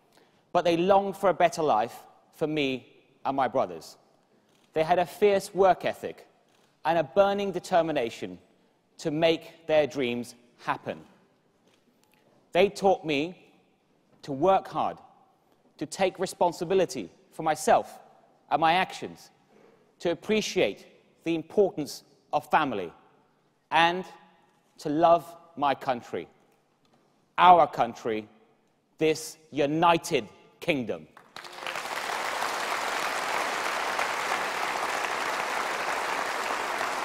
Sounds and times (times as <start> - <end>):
Narration, monologue: 0.0 - 31.4
Male speech, man speaking: 0.6 - 4.0, 4.8 - 6.3, 6.9 - 8.4, 9.0 - 11.1, 12.6 - 13.4, 14.2 - 15.0, 15.8 - 19.3, 20.0 - 22.9, 23.7 - 24.2, 24.8 - 26.3, 27.4 - 28.3, 29.0 - 31.1.